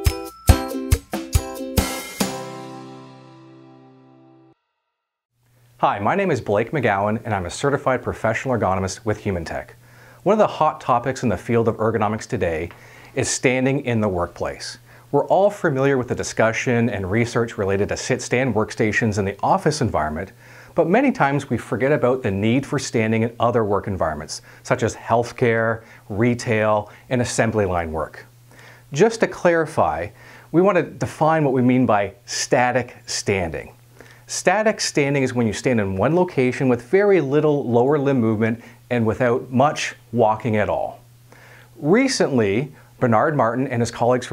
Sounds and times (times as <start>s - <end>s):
Speech: 5.8s - 28.3s, 28.9s - 41.0s, 41.8s - 44.3s.